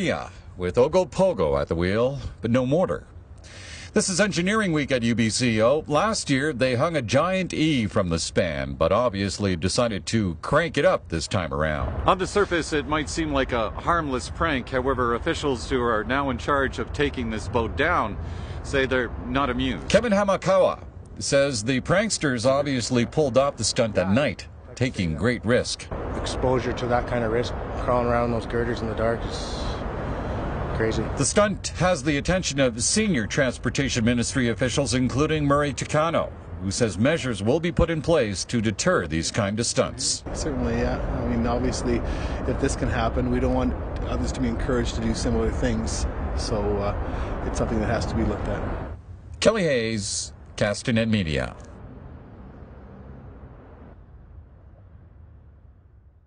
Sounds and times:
Speech: 0:00.0 - 0:03.1, 0:03.9 - 0:29.8, 0:30.7 - 0:48.7, 0:49.4 - 0:51.7.

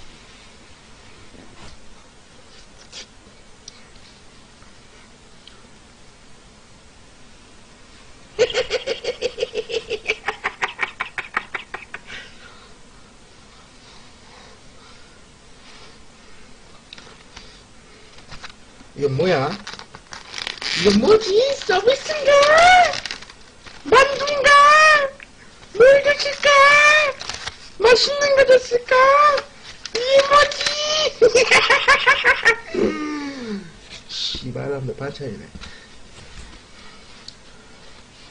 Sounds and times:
Snicker: 0:08.4 - 0:12.3, 0:31.2 - 0:33.0
Speech: 0:20.8 - 0:23.0, 0:23.9 - 0:25.2, 0:25.8 - 0:27.2, 0:27.8 - 0:31.2, 0:34.2 - 0:35.6.

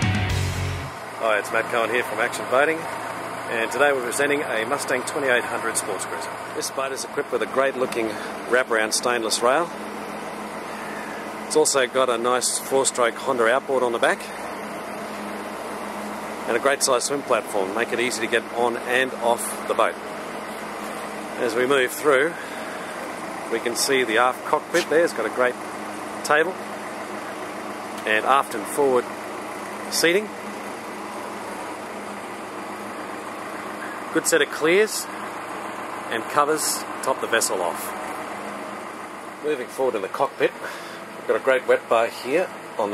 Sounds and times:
Speech: 0:01.2 - 0:02.9, 0:03.5 - 0:09.7, 0:11.5 - 0:14.4, 0:16.5 - 0:20.0, 0:21.4 - 0:22.4, 0:23.5 - 0:25.6, 0:26.2 - 0:26.6, 0:28.0 - 0:29.1, 0:29.9 - 0:30.4, 0:34.1 - 0:35.1, 0:36.1 - 0:38.0, 0:39.4 - 0:40.7, 0:41.3 - 0:42.9
Boat, Water vehicle: 0:01.2 - 0:15.8, 0:16.4 - 0:29.2, 0:39.2 - 0:42.9.

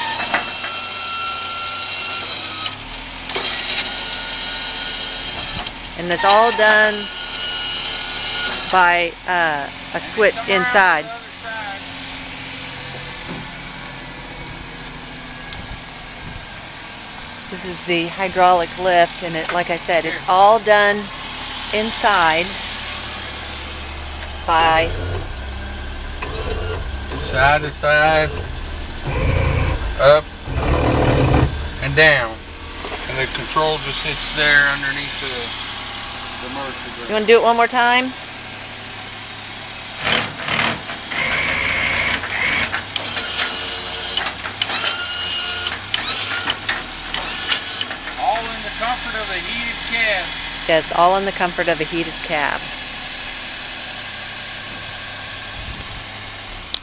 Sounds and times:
Truck: 0:00.0 - 0:56.8
Speech: 0:06.0 - 0:07.1, 0:08.8 - 0:11.8, 0:17.5 - 0:21.1, 0:21.8 - 0:22.6, 0:24.5 - 0:24.9, 0:27.1 - 0:28.4, 0:30.0 - 0:30.3, 0:33.1 - 0:35.5, 0:36.4 - 0:38.1, 0:48.2 - 0:52.6.

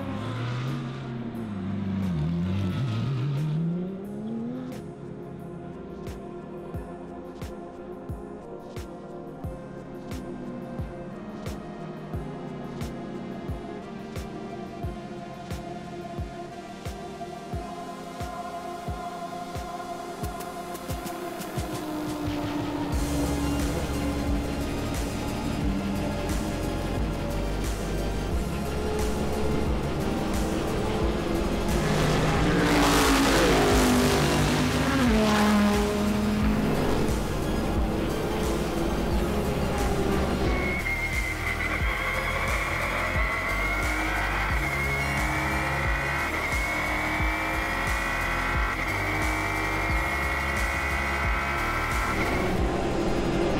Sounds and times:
Music: 0:00.0 - 0:53.5.

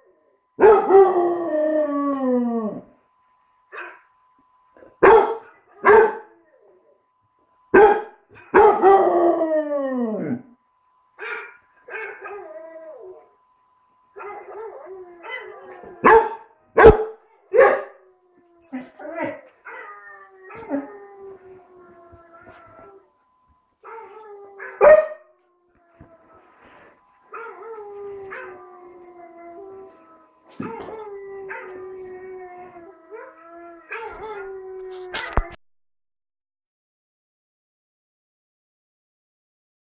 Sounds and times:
Howl: 0:00.0 - 0:03.0, 0:07.8 - 0:10.6, 0:11.2 - 0:13.6, 0:14.2 - 0:35.6.

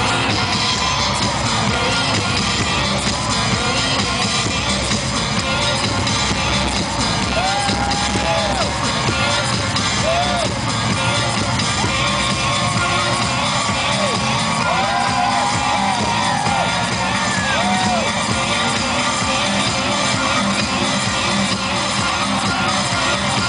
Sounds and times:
Dance music: 0:00.0 - 0:23.4
Rhythm and blues: 0:00.0 - 0:23.4.

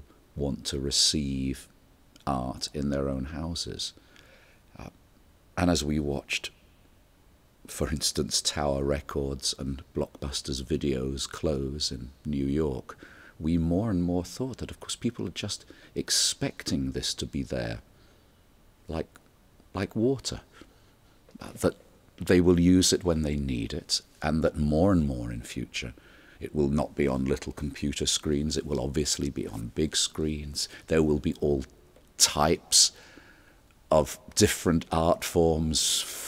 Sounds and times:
Speech: 0:00.4 - 0:04.0, 0:04.8 - 0:05.0, 0:05.6 - 0:06.6, 0:07.7 - 0:17.9, 0:18.9 - 0:20.5, 0:21.3 - 0:33.0, 0:33.9 - 0:36.2.

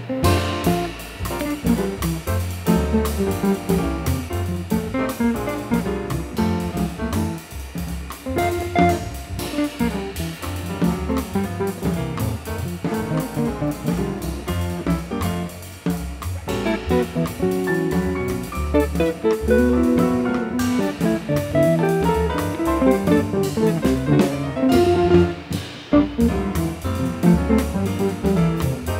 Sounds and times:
Strum: 0:00.0 - 0:28.9.

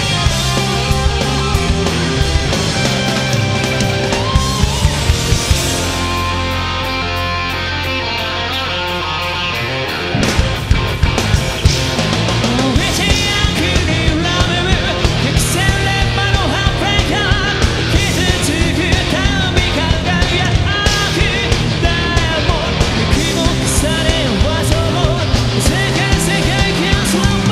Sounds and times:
Heavy metal: 0:00.0 - 0:27.5.

